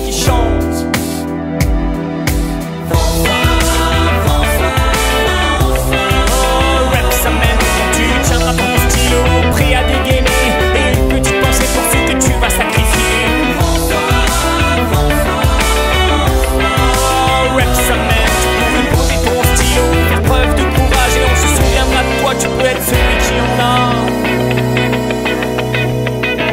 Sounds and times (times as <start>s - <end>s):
Music: 0.0s - 26.5s.